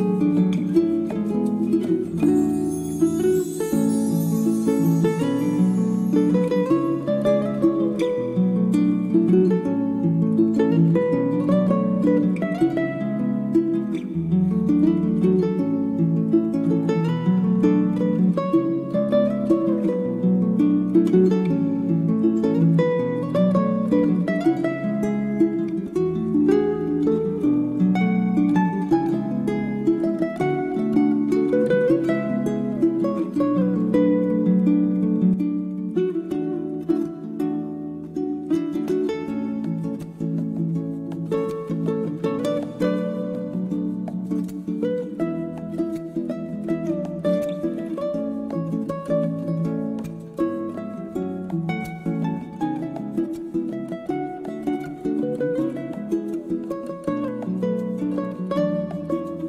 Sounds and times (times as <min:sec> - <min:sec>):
Music: 0:00.0 - 0:59.4.